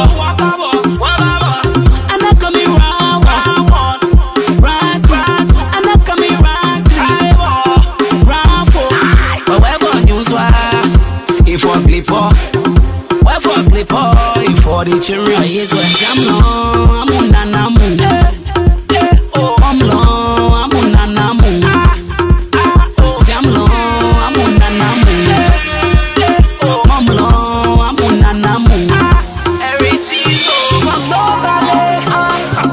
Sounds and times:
Soundtrack music: 0.0s - 32.7s.

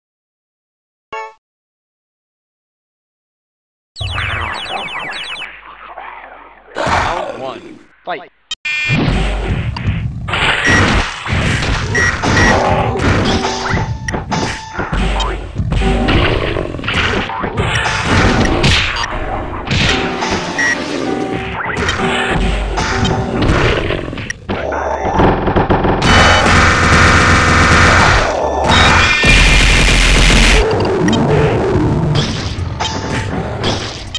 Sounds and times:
Speech: 6.8s - 8.3s, 24.6s - 25.2s.

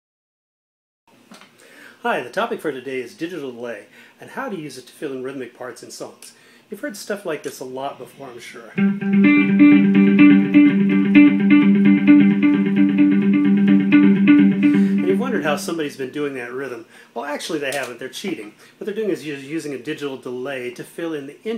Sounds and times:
Speech: 2.0s - 8.8s, 15.1s - 21.5s
Guitar: 8.8s - 15.9s.

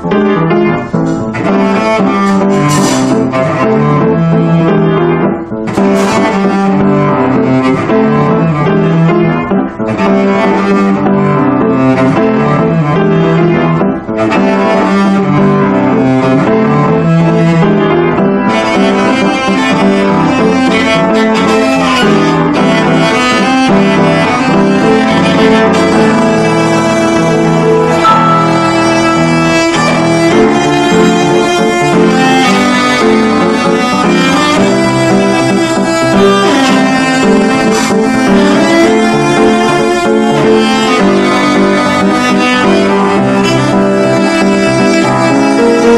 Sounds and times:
Cello: 0.0s - 45.9s.

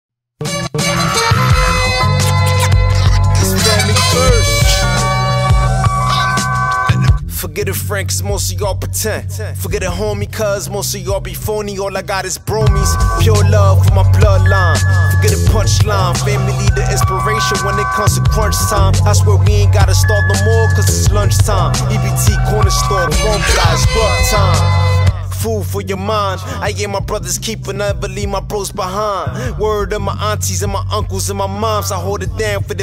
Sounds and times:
Hip hop music: 0.4s - 32.8s.

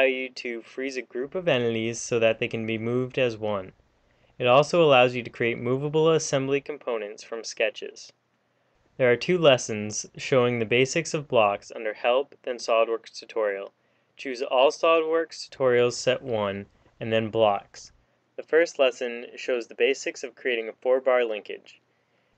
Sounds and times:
Speech: 0.0s - 3.8s, 4.4s - 8.2s, 9.0s - 21.8s.

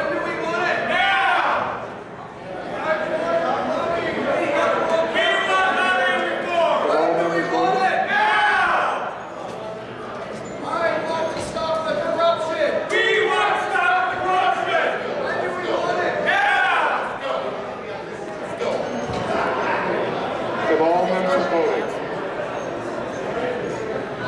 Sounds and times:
Speech: 0.0s - 1.8s, 10.6s - 22.0s.

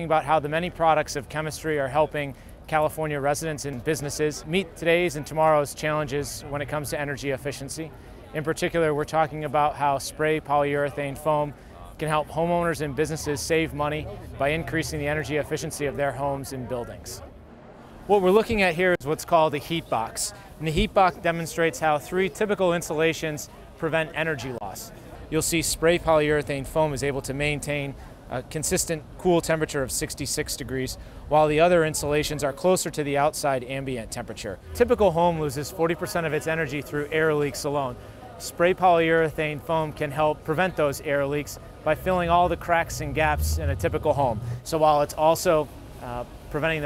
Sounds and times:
Speech: 0.0s - 17.4s, 18.1s - 46.8s.

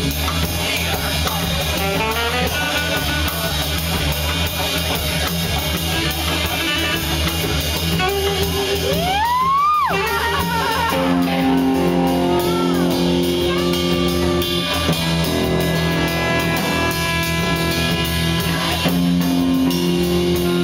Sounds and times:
Music: 0.0s - 20.6s.

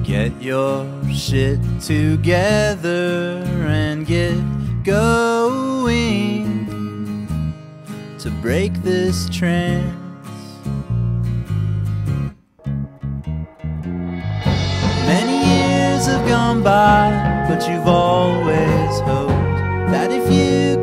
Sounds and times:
Tender music: 13.2s - 20.8s.

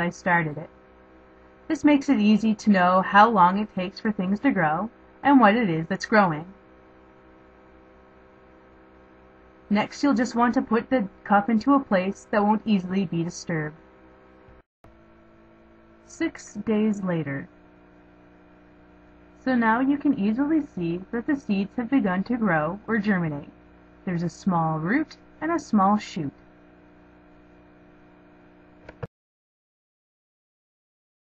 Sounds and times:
Narration, monologue: 0.0s - 27.9s.

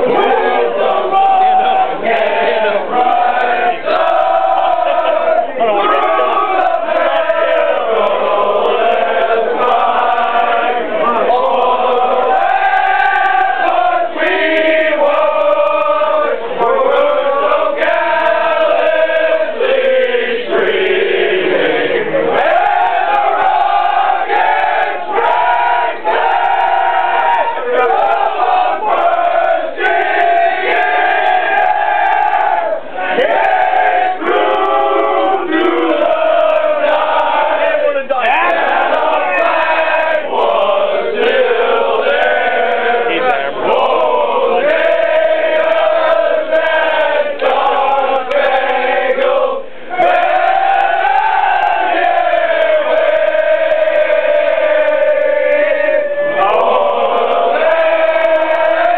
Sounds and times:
Choir: 0.0s - 58.9s.

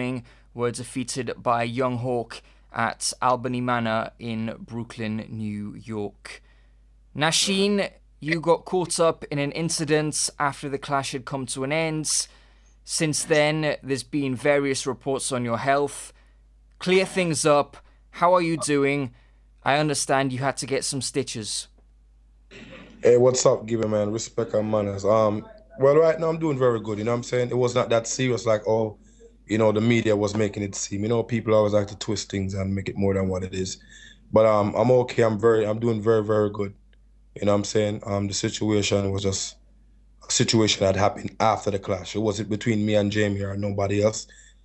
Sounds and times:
Speech: 0.0s - 6.4s, 7.2s - 12.3s, 12.9s - 16.2s, 16.8s - 21.8s, 23.0s - 36.8s, 37.4s - 39.6s, 40.2s - 44.3s.

